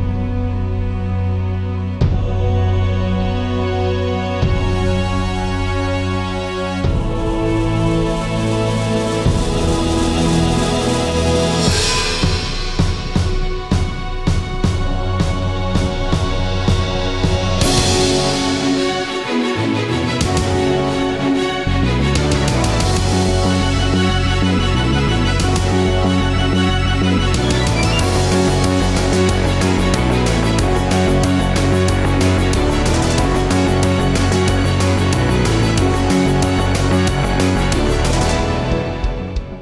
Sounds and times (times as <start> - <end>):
Music: 0.0 - 39.6.